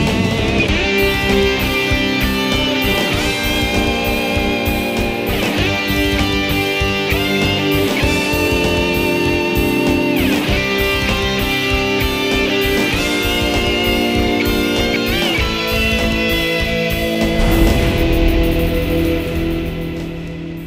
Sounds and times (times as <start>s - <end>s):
Strum: 17.1s - 20.6s.